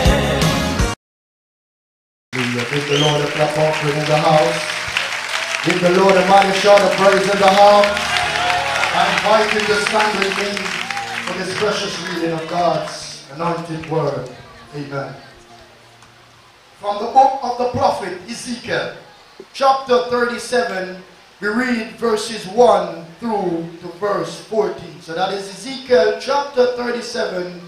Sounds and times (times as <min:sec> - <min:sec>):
Speech: 0:02.4 - 0:04.7, 0:05.6 - 0:07.9, 0:09.0 - 0:15.7, 0:16.8 - 0:27.6.